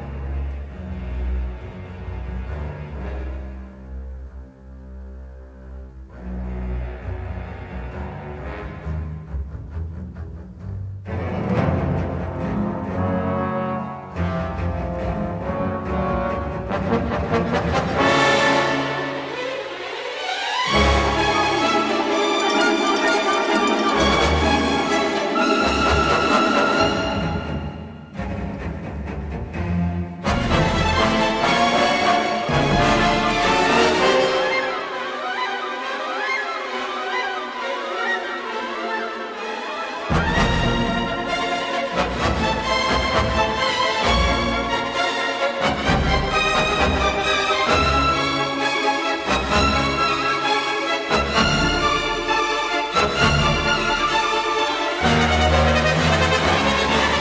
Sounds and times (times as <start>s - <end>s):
Music: 0.0s - 57.2s.